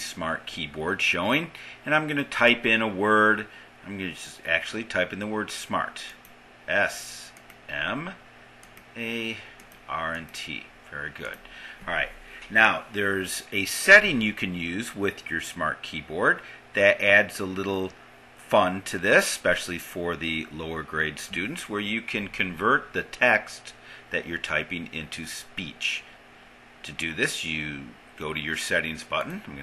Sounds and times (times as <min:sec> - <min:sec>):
Male speech, man speaking: 0:00.0 - 0:08.2, 0:09.0 - 0:26.1, 0:26.8 - 0:29.6
Narration, monologue: 0:00.0 - 0:29.6.